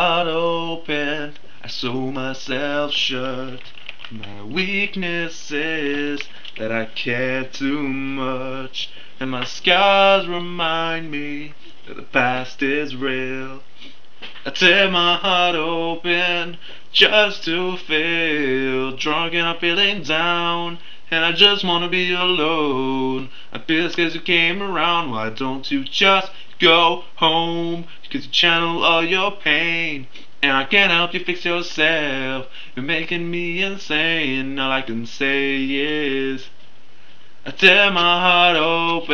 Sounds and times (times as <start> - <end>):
Vocal music: 0.0 - 36.7, 37.4 - 39.1.